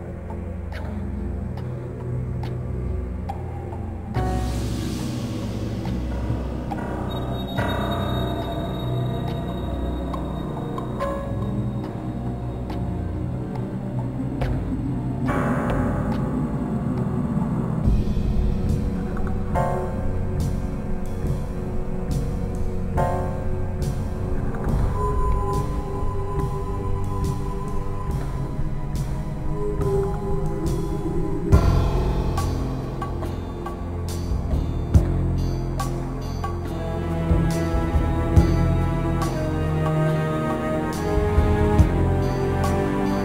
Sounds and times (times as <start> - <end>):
Soundtrack music: 0.0 - 43.2.